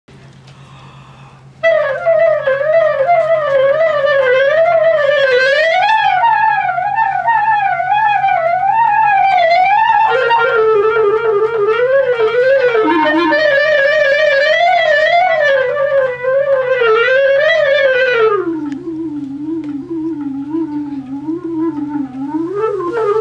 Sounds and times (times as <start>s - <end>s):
Clarinet: 1.5s - 23.2s.